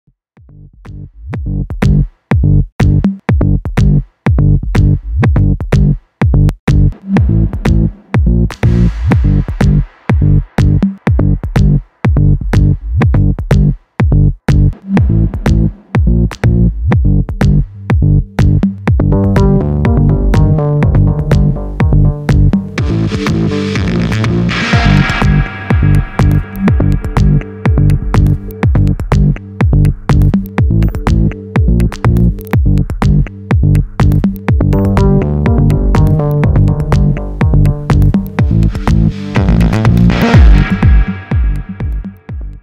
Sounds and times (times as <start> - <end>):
Drum machine: 0.4 - 42.6.